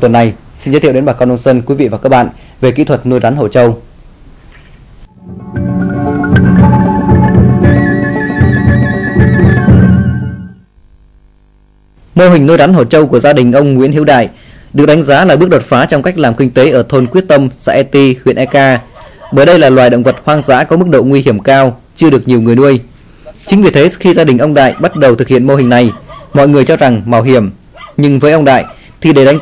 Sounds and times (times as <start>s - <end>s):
Male speech, man speaking: 0.0s - 3.8s, 12.2s - 18.8s, 19.4s - 22.8s, 23.4s - 29.4s
Music: 5.1s - 10.7s.